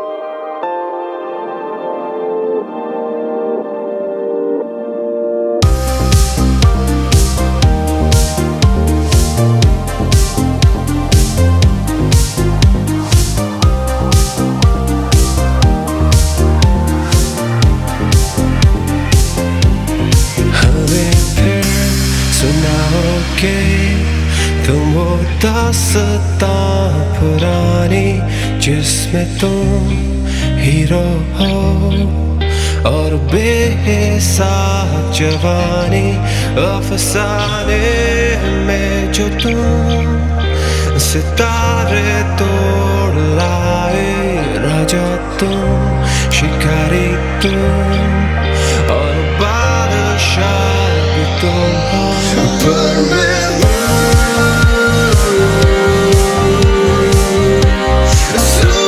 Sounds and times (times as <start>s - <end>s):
Music: 0.0s - 58.8s.